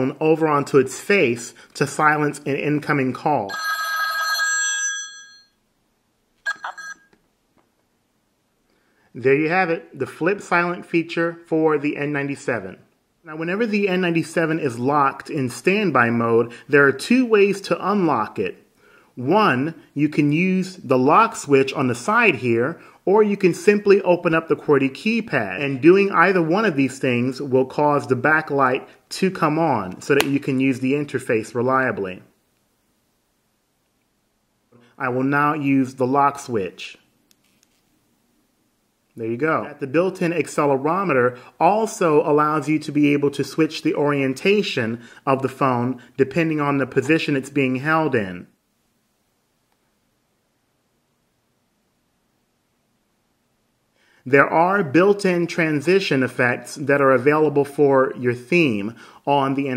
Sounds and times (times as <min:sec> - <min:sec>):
Speech: 0:00.0 - 0:03.5, 0:09.2 - 0:18.6, 0:19.2 - 0:32.3, 0:35.0 - 0:37.1, 0:39.2 - 0:48.6, 0:54.3 - 0:59.7
Telephone bell ringing: 0:03.5 - 0:05.6, 0:06.5 - 0:07.1.